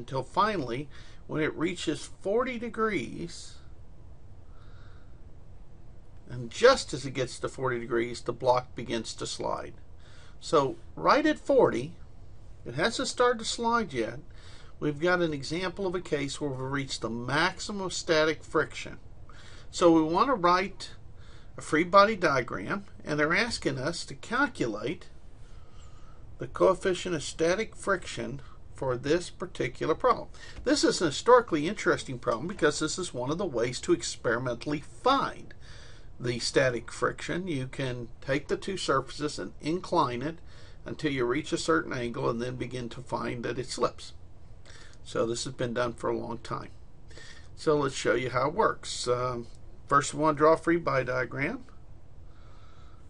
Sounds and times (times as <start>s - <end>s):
Speech: 0.0s - 3.7s, 6.3s - 9.8s, 10.4s - 12.0s, 12.6s - 19.0s, 19.7s - 21.0s, 21.6s - 25.1s, 26.4s - 35.6s, 36.2s - 44.2s, 45.0s - 46.8s, 47.6s - 51.8s.